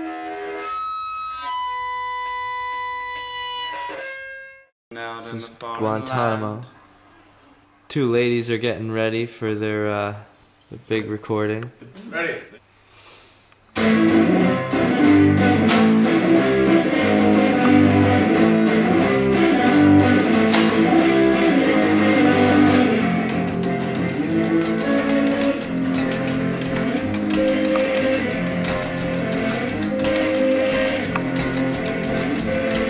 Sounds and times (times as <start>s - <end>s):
Music: 0.0s - 4.7s, 13.8s - 32.8s.